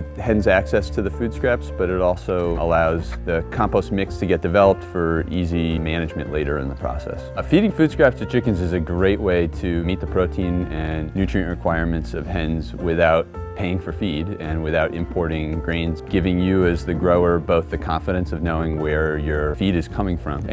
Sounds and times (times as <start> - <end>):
Music: 0.0 - 20.5
Speech: 0.0 - 20.5.